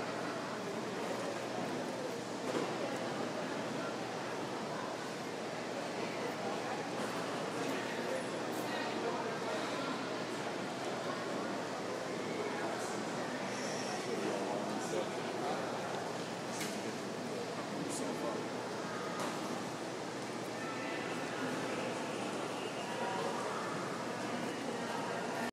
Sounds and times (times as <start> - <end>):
Speech: 0.0 - 19.6, 20.4 - 25.5.